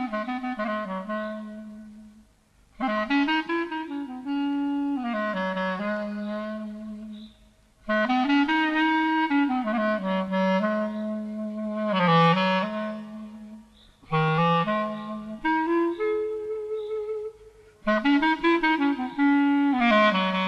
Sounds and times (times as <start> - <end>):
Clarinet: 0.0 - 20.4.